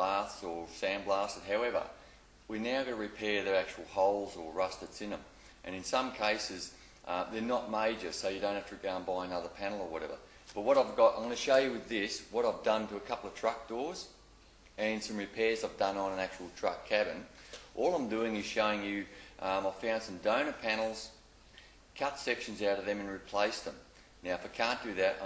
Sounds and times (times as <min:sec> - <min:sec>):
Speech: 0:00.0 - 0:14.2, 0:14.8 - 0:21.2, 0:22.0 - 0:25.2.